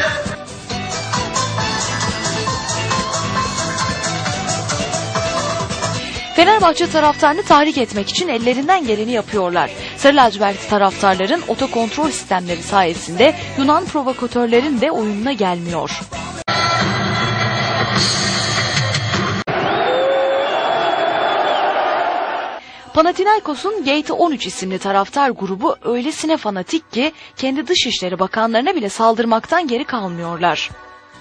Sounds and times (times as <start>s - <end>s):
Music: 0.0s - 19.5s, 22.6s - 31.2s
Speech: 6.4s - 16.1s, 22.9s - 30.8s.